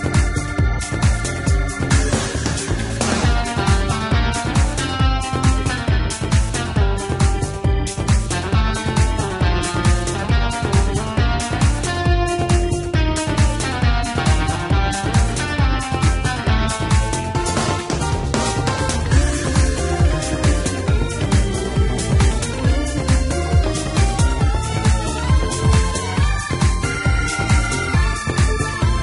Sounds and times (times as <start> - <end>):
Exciting music: 0.0 - 29.0.